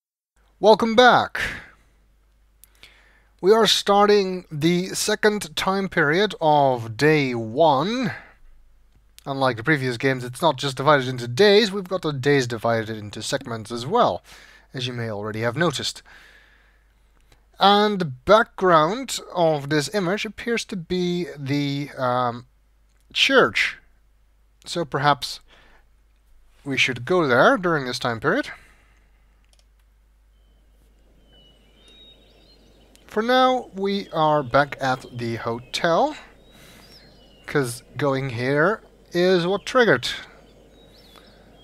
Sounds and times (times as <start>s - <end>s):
Speech: 0.6s - 1.8s, 3.4s - 8.3s, 9.2s - 16.1s, 17.6s - 22.5s, 23.1s - 23.9s, 24.6s - 25.5s, 26.6s - 28.6s, 33.1s - 36.3s, 37.5s - 40.4s.